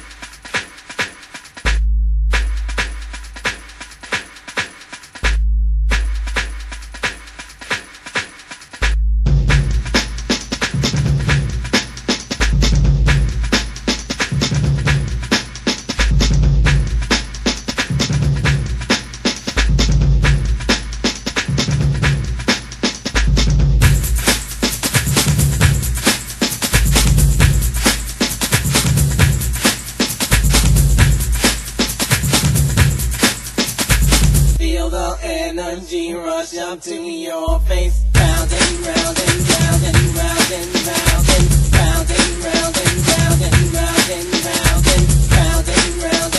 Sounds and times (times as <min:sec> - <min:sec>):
Music: 0:00.0 - 0:35.1, 0:37.6 - 0:46.3.